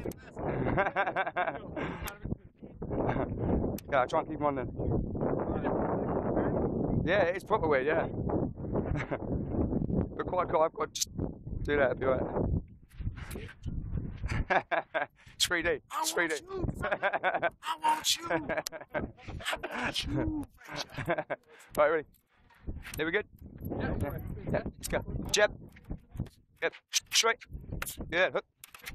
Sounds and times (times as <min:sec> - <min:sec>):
Speech: 0:01.5 - 0:02.6, 0:03.9 - 0:04.9, 0:05.5 - 0:08.1, 0:11.7 - 0:12.2, 0:15.4 - 0:16.8, 0:17.6 - 0:20.8, 0:23.0 - 0:25.6, 0:26.6 - 0:27.4, 0:28.1 - 0:28.4.